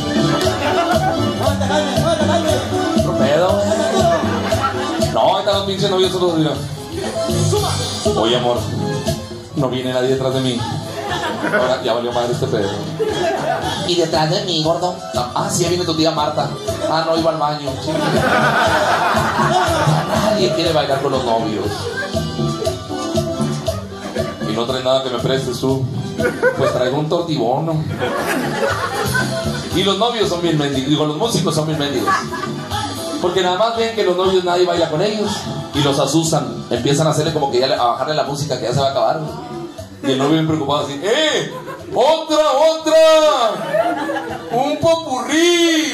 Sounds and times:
Music: 0:00.0 - 0:45.9
Speech: 0:05.0 - 0:06.6, 0:08.2 - 0:08.7, 0:09.6 - 0:10.8, 0:11.5 - 0:12.9, 0:13.8 - 0:18.0, 0:20.2 - 0:21.8, 0:24.4 - 0:25.8, 0:26.6 - 0:27.9, 0:29.7 - 0:32.2, 0:33.2 - 0:43.7, 0:44.5 - 0:45.9.

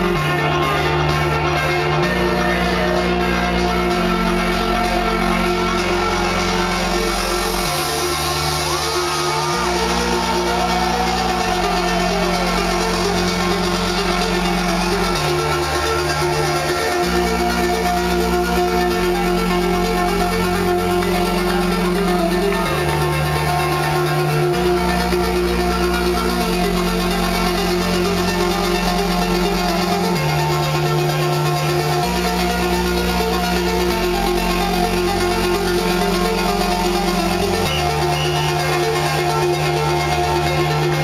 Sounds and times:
Independent music: 0:00.0 - 0:41.0.

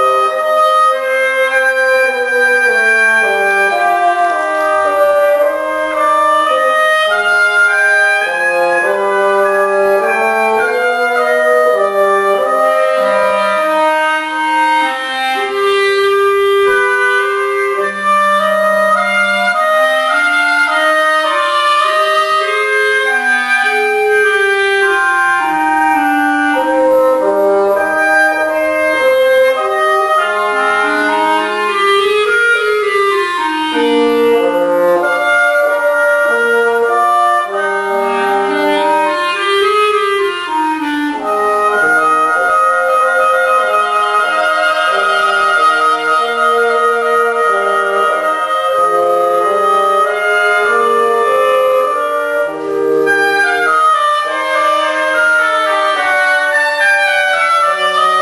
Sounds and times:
Clarinet: 0:00.0 - 0:58.2.

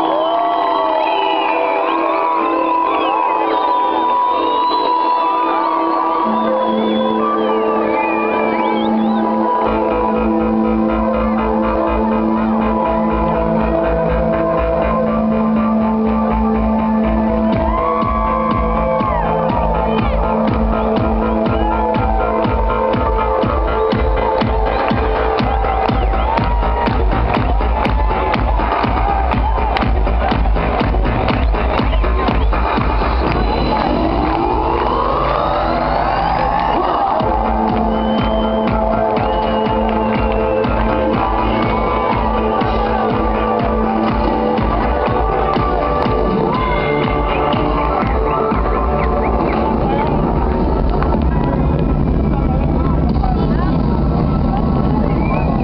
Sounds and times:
Music: 0:00.0 - 0:55.6.

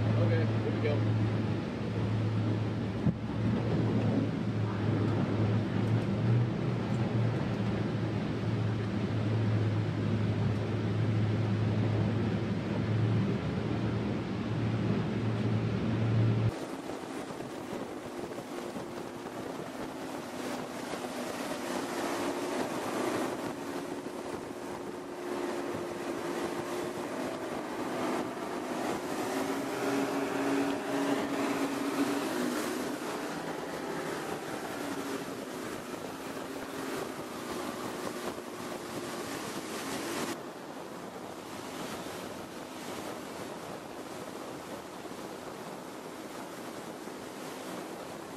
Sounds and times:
Motorboat, speedboat: 0:00.0 - 0:48.3.

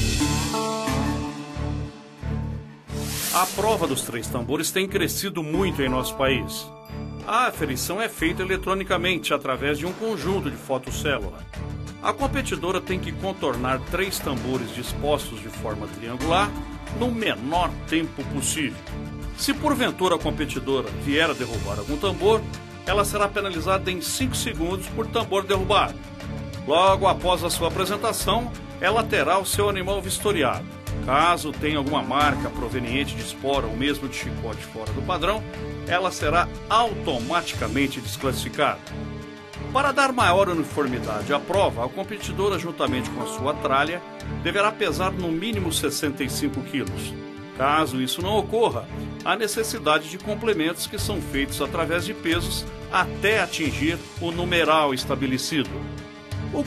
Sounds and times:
Music: 0:00.0 - 0:56.6
Speech: 0:03.3 - 0:18.8, 0:19.4 - 0:26.0, 0:26.6 - 0:38.8, 0:39.7 - 0:55.8.

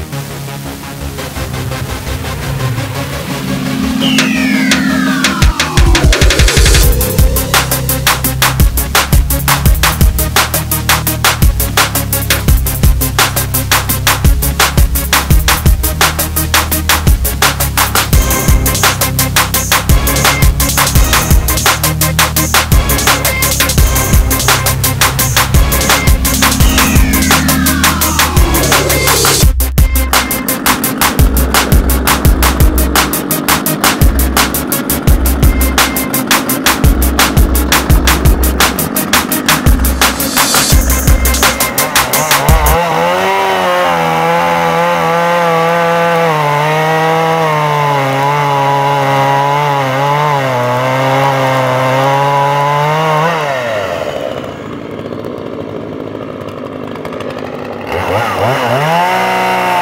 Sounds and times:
Music: 0:00.0 - 0:54.4, 0:58.8 - 0:59.8
Chainsaw: 0:00.0 - 0:59.8.

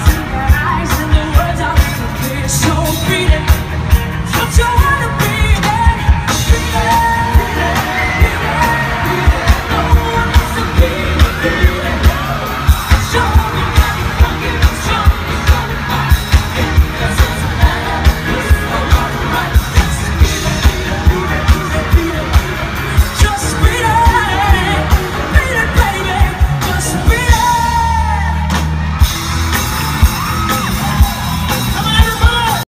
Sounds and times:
Music: 0:00.0 - 0:32.6.

